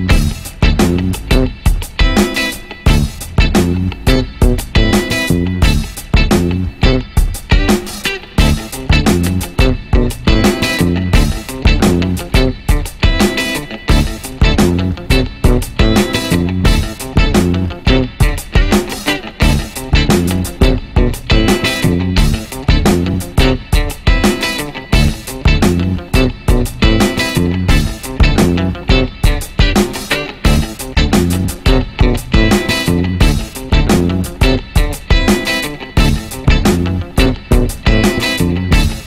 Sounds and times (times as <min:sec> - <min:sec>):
Music: 0:00.0 - 0:39.0.